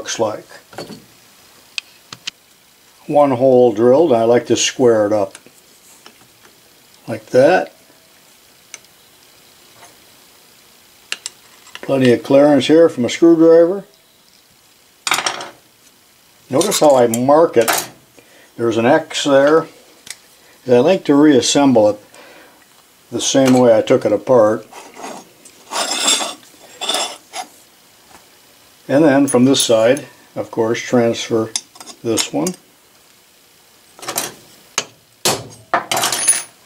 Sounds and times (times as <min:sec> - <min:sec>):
Speech: 0:00.0 - 0:00.7, 0:03.0 - 0:05.4, 0:07.0 - 0:07.8, 0:11.8 - 0:13.9, 0:16.5 - 0:17.8, 0:18.6 - 0:19.7, 0:20.6 - 0:22.0, 0:23.1 - 0:24.7, 0:28.9 - 0:32.6.